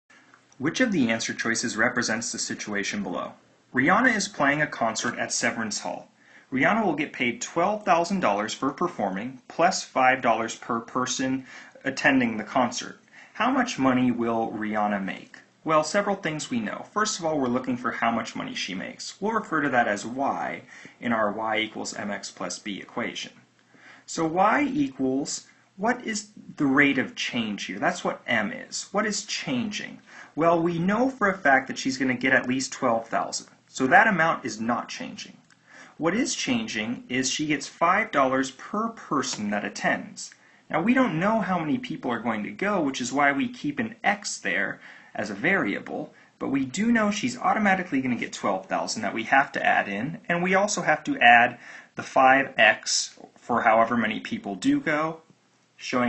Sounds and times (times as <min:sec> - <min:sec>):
Inside, small room: 0:00.0 - 0:56.0
Speech: 0:00.6 - 0:23.4, 0:24.1 - 0:35.4, 0:36.0 - 0:56.0.